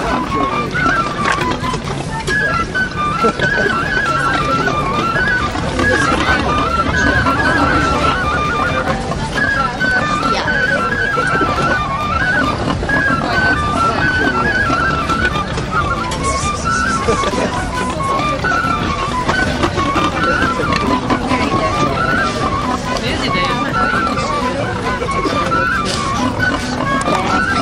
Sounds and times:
Music: 0.0s - 27.6s
Speech: 5.8s - 11.7s, 21.2s - 26.0s.

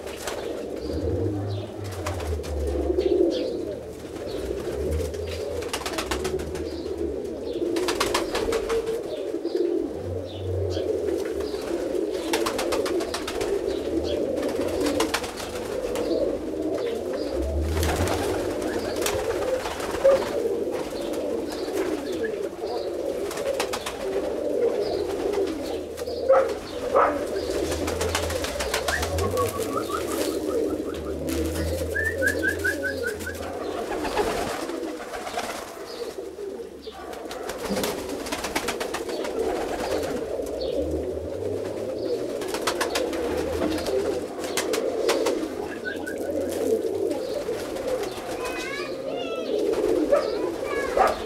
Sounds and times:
Outside, rural or natural: 0.0s - 51.2s
Pigeon, dove: 0.0s - 51.2s.

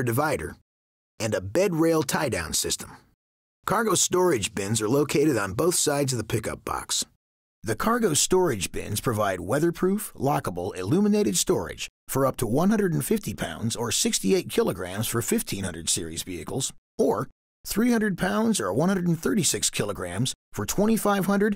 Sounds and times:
Speech: 0.0s - 0.6s, 1.2s - 3.1s, 3.7s - 21.5s.

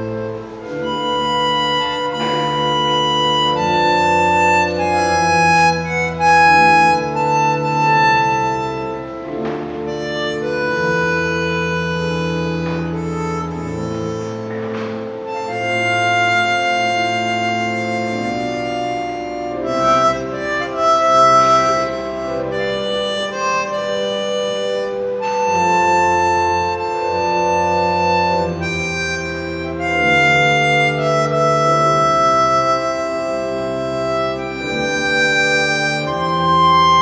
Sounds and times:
Harmonica: 0.0s - 37.0s.

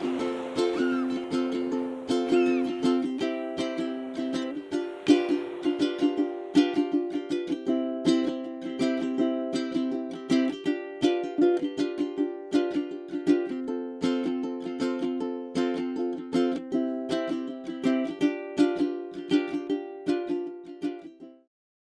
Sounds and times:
Music: 0.0s - 21.5s.

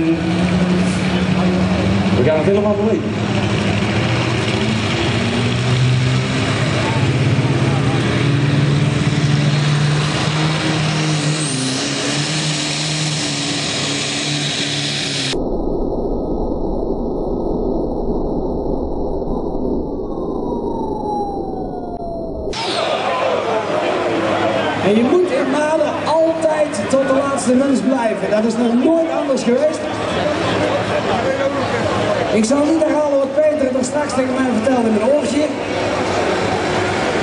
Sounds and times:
Speech: 2.2s - 3.2s, 22.7s - 35.7s.

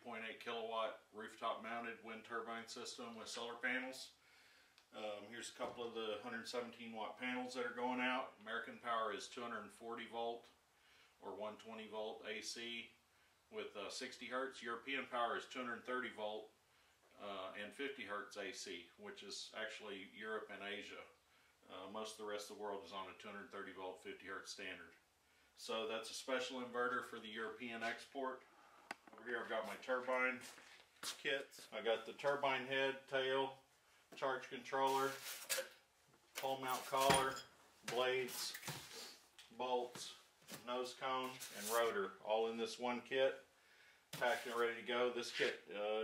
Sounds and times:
Speech: 0.0s - 4.2s, 4.9s - 10.6s, 11.2s - 25.0s, 25.6s - 28.4s, 29.1s - 33.6s, 34.2s - 35.2s, 36.4s - 38.6s, 39.5s - 43.5s, 44.2s - 46.0s.

